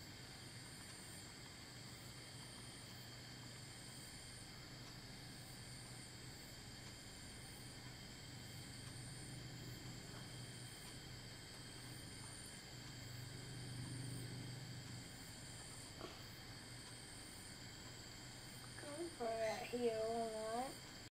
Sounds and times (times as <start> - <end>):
Hiss: 0.0 - 21.1
Speech: 18.8 - 20.8.